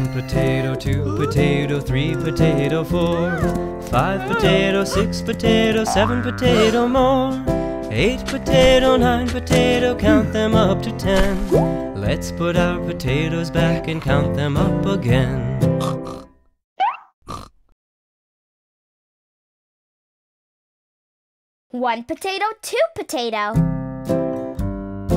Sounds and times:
Singing: 0.0 - 11.4
Music for children: 0.0 - 15.8.

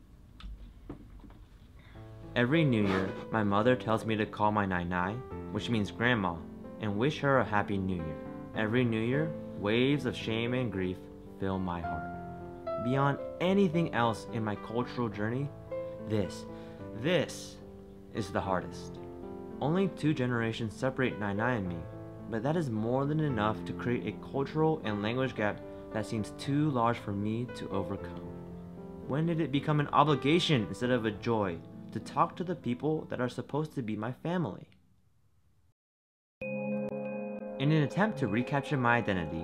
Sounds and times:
Music: 1.8 - 34.1, 36.4 - 39.4
Speech: 2.4 - 12.1, 12.8 - 17.6, 18.2 - 19.0, 19.6 - 28.2, 29.1 - 34.8, 37.6 - 39.4.

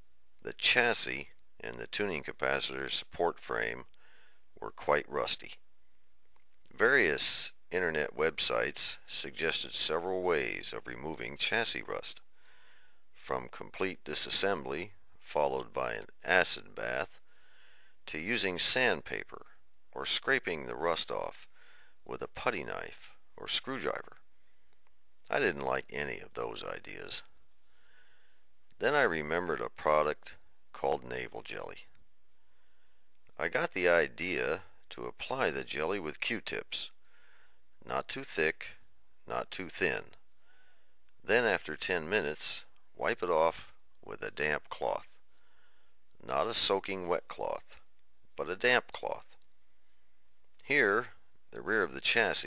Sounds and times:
Speech: 0.4 - 3.9, 4.6 - 5.6, 6.7 - 12.2, 13.2 - 17.2, 18.1 - 21.5, 22.1 - 24.2, 25.3 - 27.3, 28.8 - 31.9, 33.4 - 37.0, 37.8 - 40.2, 41.2 - 45.2, 46.2 - 47.8, 48.4 - 49.4, 50.6 - 52.4
Radio: 0.5 - 4.0, 6.7 - 12.3, 13.2 - 17.2, 25.3 - 27.3, 28.8 - 31.9, 41.3 - 45.2, 46.2 - 49.4, 50.6 - 52.4.

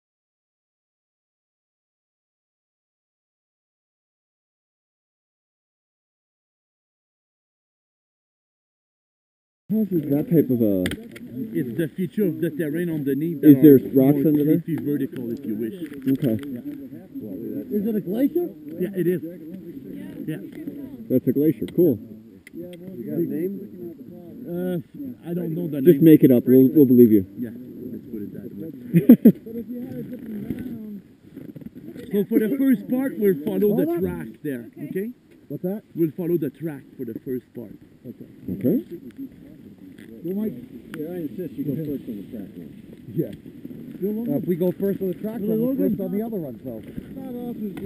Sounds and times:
Speech: 9.7 - 31.0, 31.9 - 43.4, 44.0 - 47.8.

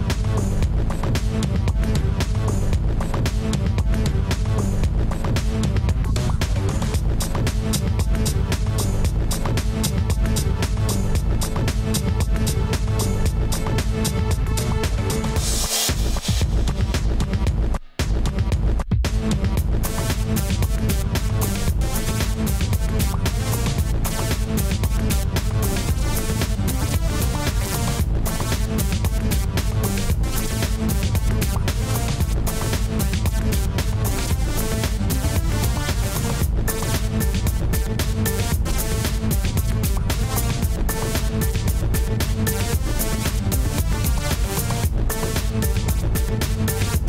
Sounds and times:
Techno: 0.0 - 47.0.

